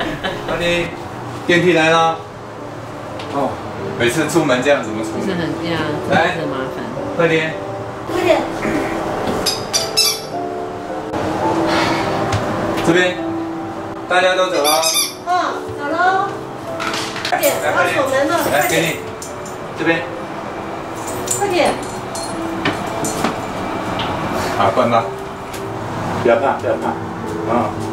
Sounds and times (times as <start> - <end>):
Music: 0.0 - 27.9.